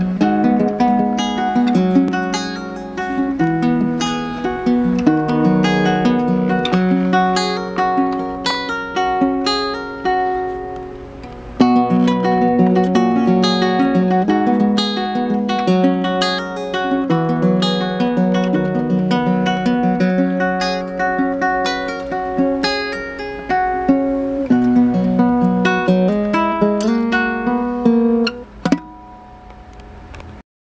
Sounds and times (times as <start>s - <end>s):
Music: 0.0s - 30.4s.